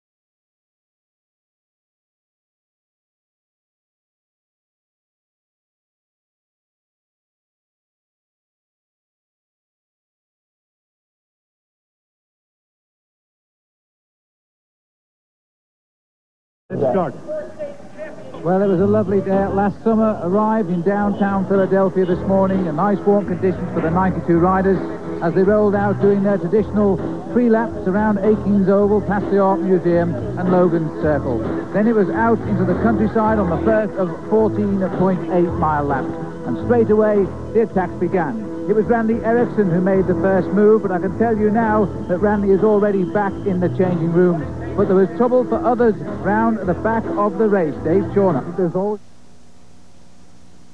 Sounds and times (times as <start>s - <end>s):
Speech: 16.7s - 49.0s
Music: 18.2s - 49.0s.